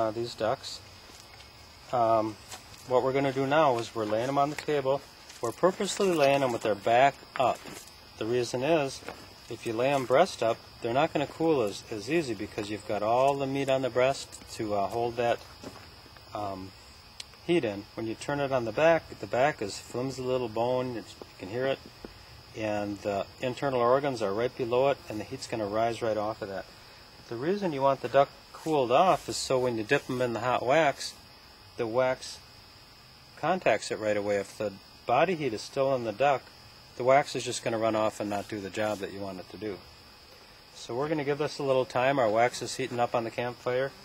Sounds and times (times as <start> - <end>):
Speech: 0.0 - 0.8, 1.9 - 15.4, 16.3 - 16.7, 17.4 - 21.8, 22.5 - 26.7, 27.3 - 31.2, 31.8 - 32.4, 33.4 - 39.8, 40.8 - 44.0.